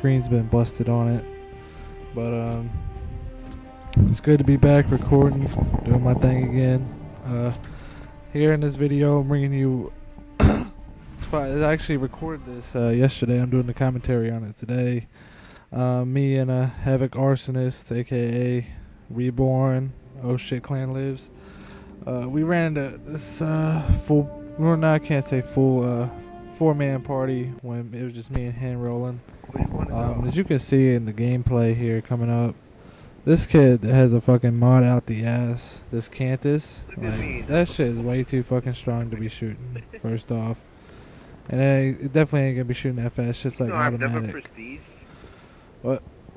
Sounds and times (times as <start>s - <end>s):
Speech: 0.0s - 1.3s, 2.2s - 2.8s, 4.0s - 7.6s, 8.4s - 10.0s, 11.2s - 15.1s, 15.8s - 21.3s, 22.1s - 32.6s, 33.3s - 40.6s, 41.5s - 45.0s, 45.8s - 46.0s.